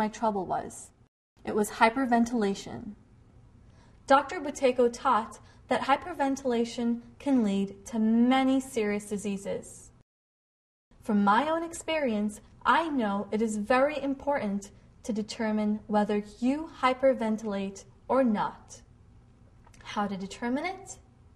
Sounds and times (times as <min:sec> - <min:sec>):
Female speech, woman speaking: 0:00.0 - 0:03.0, 0:04.1 - 0:09.9, 0:11.0 - 0:18.8, 0:19.8 - 0:21.1.